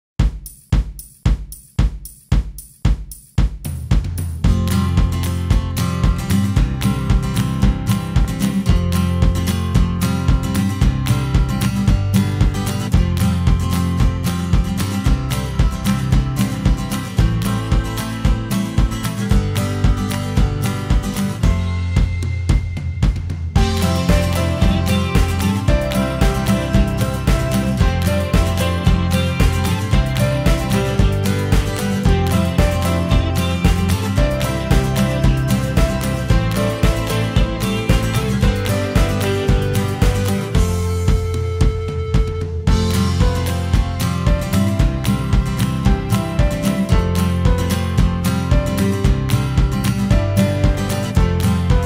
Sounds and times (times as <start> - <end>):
Music: 0.2 - 51.8.